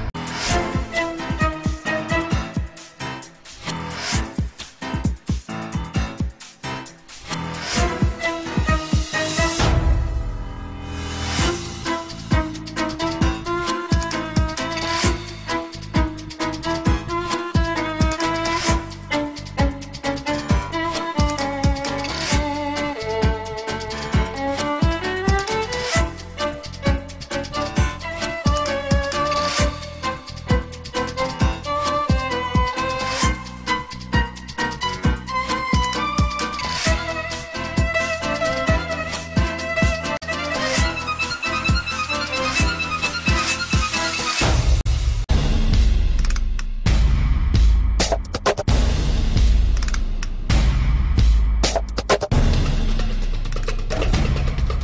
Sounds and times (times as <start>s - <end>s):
Music: 0.0s - 54.8s.